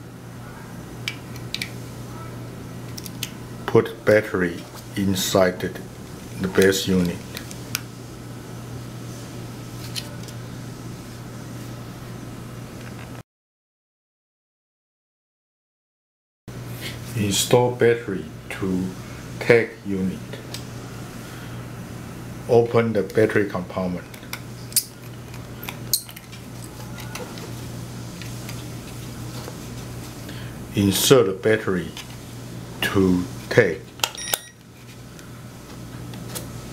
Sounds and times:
Speech: 3.7s - 7.4s, 17.1s - 20.4s, 22.5s - 24.1s, 30.7s - 32.0s, 32.8s - 33.9s.

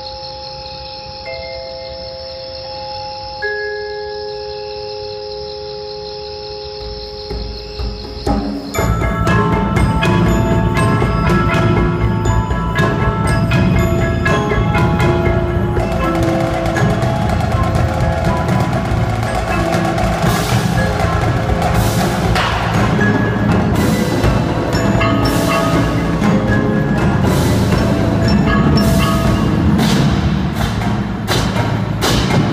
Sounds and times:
Wood block: 6.7s - 32.5s.

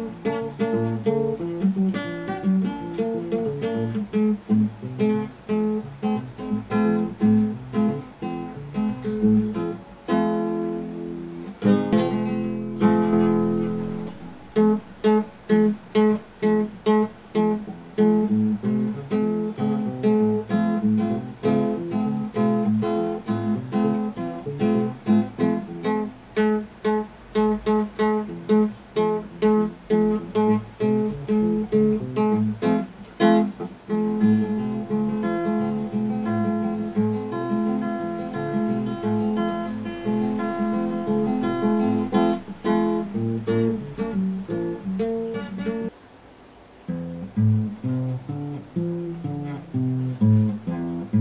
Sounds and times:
Guitar: 0.0s - 51.2s.

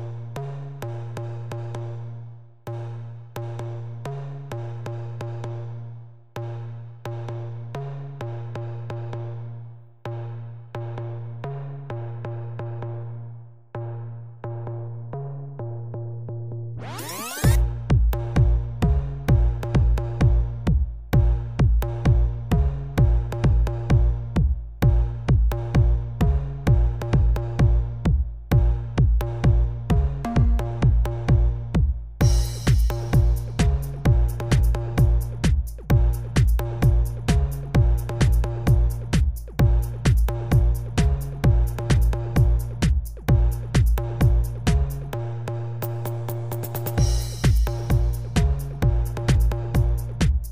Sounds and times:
House music: 16.8s - 50.5s.

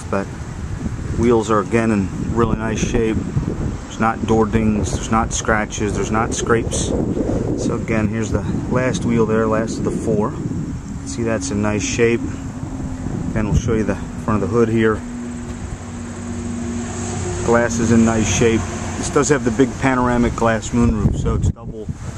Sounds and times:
Speech: 0.0s - 0.3s, 1.2s - 3.2s, 3.9s - 7.0s, 7.6s - 10.4s, 11.0s - 12.4s, 13.4s - 15.0s, 17.4s - 21.9s
Car: 0.0s - 22.1s
Outside, rural or natural: 0.0s - 22.1s.

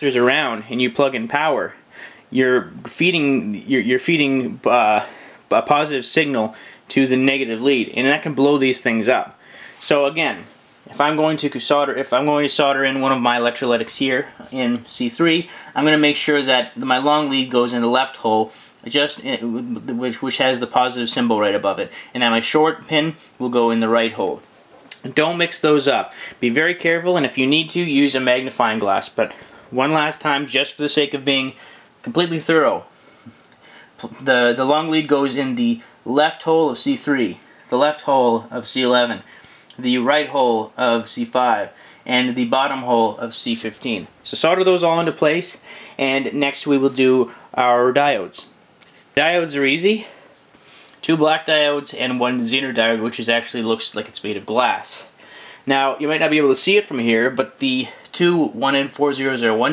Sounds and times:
Speech: 0.0s - 32.9s, 34.0s - 48.6s, 49.2s - 50.2s, 50.9s - 59.7s
Inside, small room: 0.0s - 59.7s.

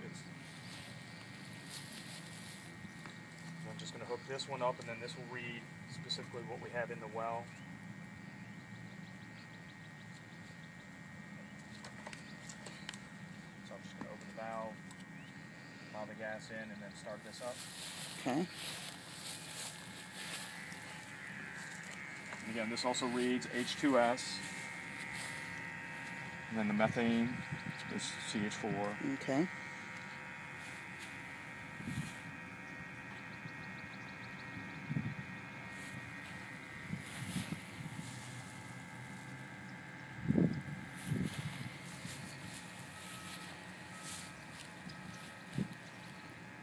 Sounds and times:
Outside, rural or natural: 0.0s - 46.6s
Speech: 3.6s - 7.5s, 16.0s - 17.6s, 26.5s - 29.5s.

